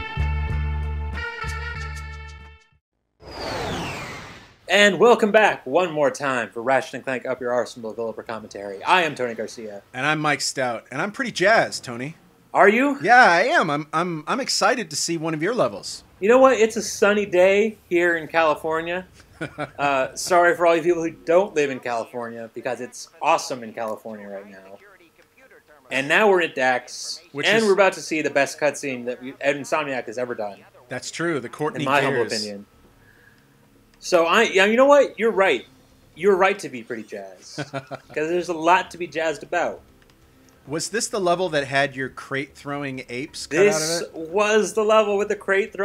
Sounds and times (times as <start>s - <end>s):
Speech: 4.7s - 19.1s, 19.8s - 32.7s, 34.0s - 39.8s, 40.7s - 45.8s.